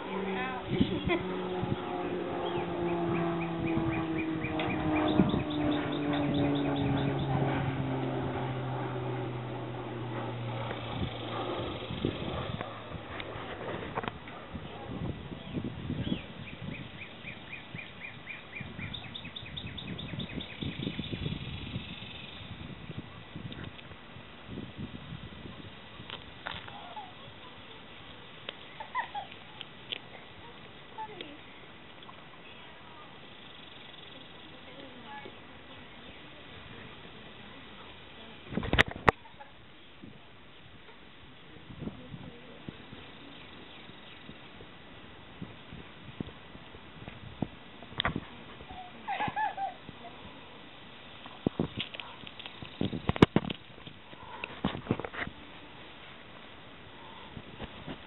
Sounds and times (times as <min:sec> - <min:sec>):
Speech: 0:34.0 - 0:38.6, 0:41.5 - 0:43.4.